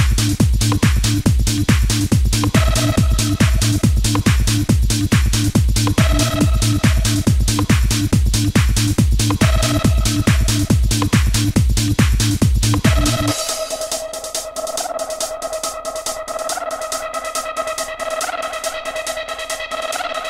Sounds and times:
Trance music: 0.0 - 20.3.

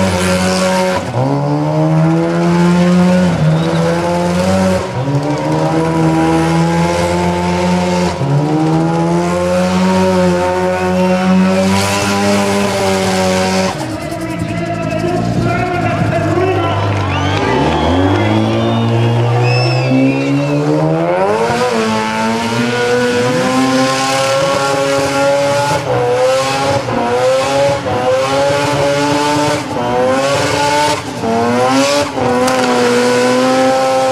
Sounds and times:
Race car, auto racing: 0.0 - 34.1
Tire squeal: 3.0 - 6.4, 16.5 - 21.7
Speech: 13.7 - 17.0.

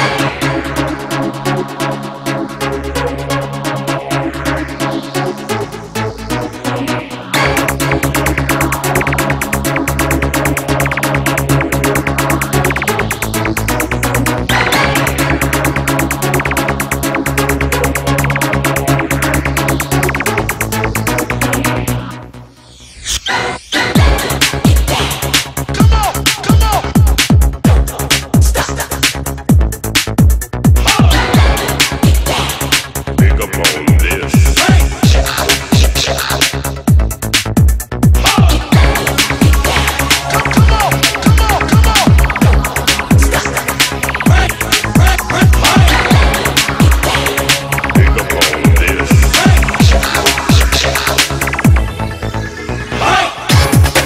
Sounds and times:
Music: 0.0 - 54.0.

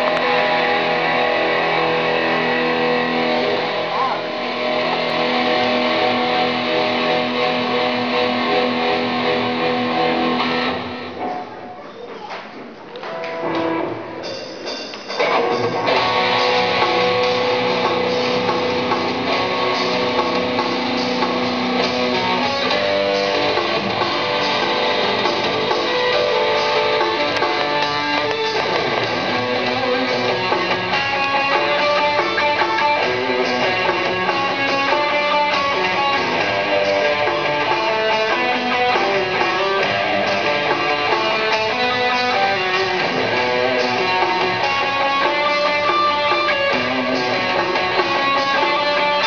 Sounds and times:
Guitar: 0.0 - 49.2.

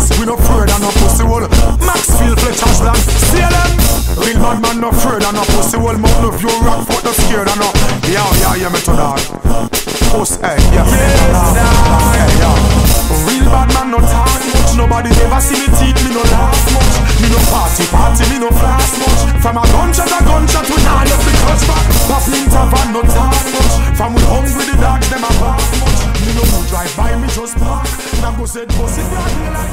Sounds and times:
Hip hop music: 0.0 - 29.7.

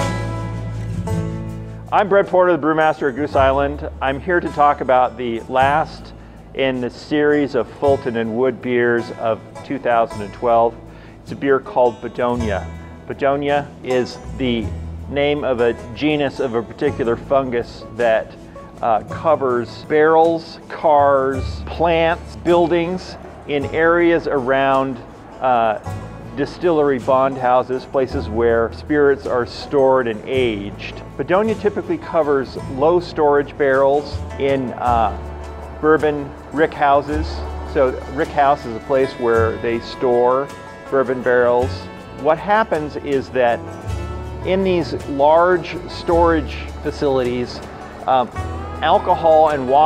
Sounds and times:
Music: 0.0 - 49.8
Speech: 1.9 - 35.2, 35.8 - 43.6, 44.4 - 49.8.

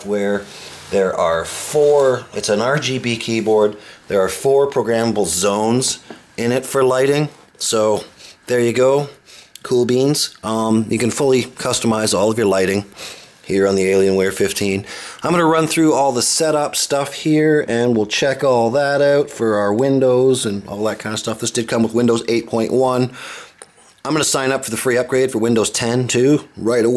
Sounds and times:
Speech: 0.0 - 23.2, 24.0 - 26.9.

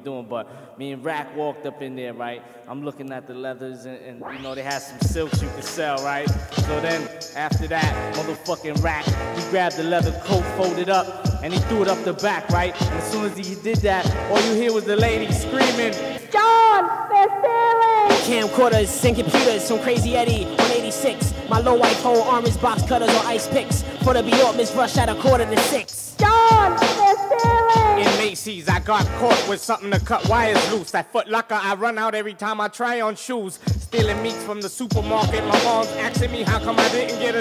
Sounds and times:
Music: 4.3 - 16.6, 17.4 - 31.0, 33.6 - 37.4.

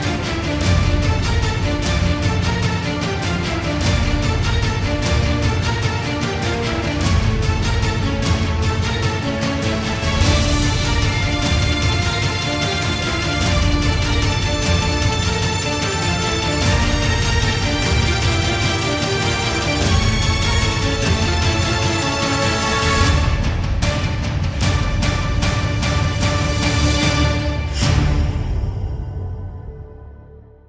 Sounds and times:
Music: 0.0 - 30.6.

